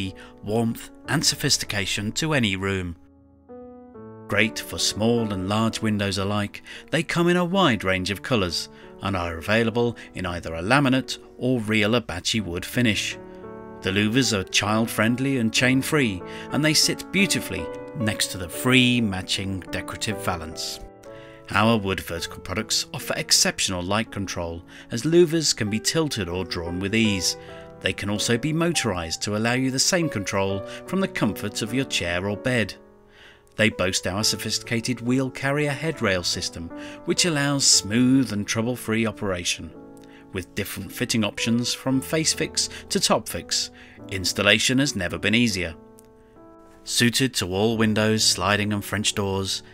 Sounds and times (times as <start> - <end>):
Speech: 0.0 - 3.0, 4.3 - 13.2, 13.8 - 20.9, 21.5 - 32.8, 33.6 - 45.8, 46.9 - 49.7
Music: 0.0 - 49.7.